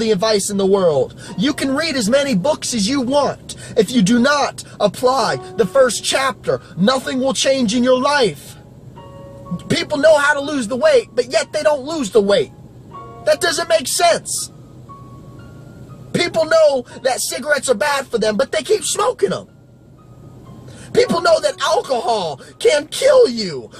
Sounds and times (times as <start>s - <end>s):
Male speech, man speaking: 0.0s - 8.6s, 9.6s - 12.5s, 13.3s - 14.5s, 16.2s - 19.5s, 21.0s - 23.7s
Music: 0.0s - 23.7s
Narration, monologue: 0.0s - 23.7s.